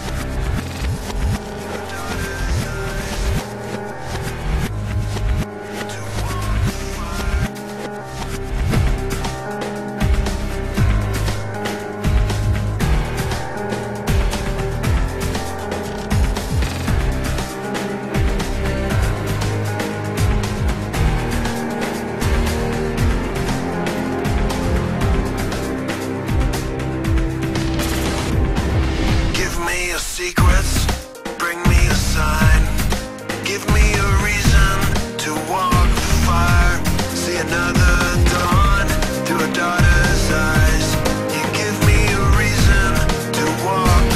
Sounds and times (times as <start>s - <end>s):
Music: 0.0s - 44.1s.